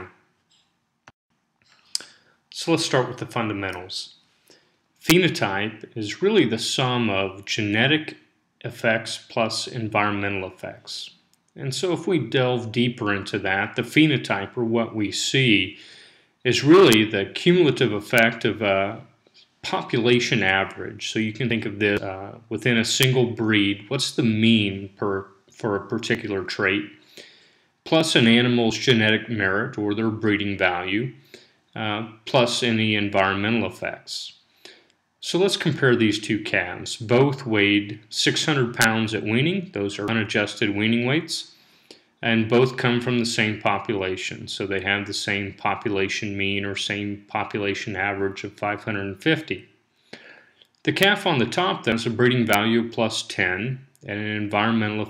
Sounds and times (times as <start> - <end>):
Speech: 2.0 - 4.2, 5.0 - 27.0, 27.9 - 31.2, 31.8 - 34.4, 35.2 - 41.6, 42.2 - 49.7, 50.9 - 55.1.